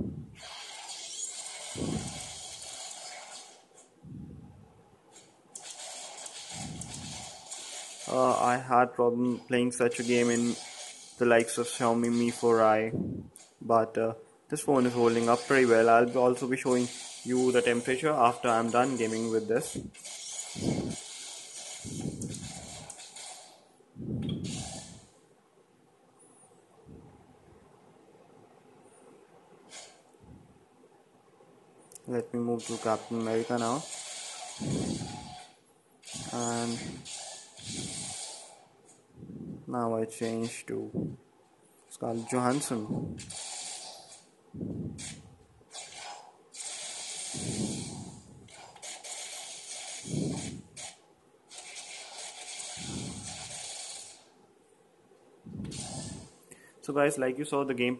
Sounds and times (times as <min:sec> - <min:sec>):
Speech: 0:08.1 - 0:10.6, 0:11.2 - 0:13.0, 0:13.6 - 0:19.8, 0:32.0 - 0:33.8, 0:36.3 - 0:37.0, 0:39.7 - 0:41.0, 0:41.9 - 0:43.0, 0:56.8 - 0:57.9.